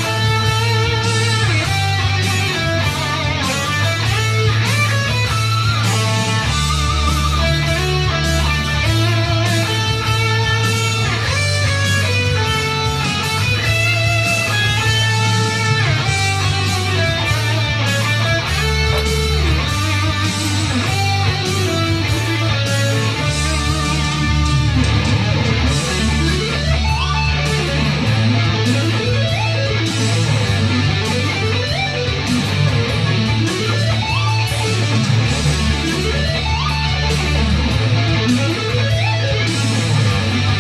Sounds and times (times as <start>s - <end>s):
Electric guitar: 0.0s - 40.6s
Happy music: 0.0s - 40.6s.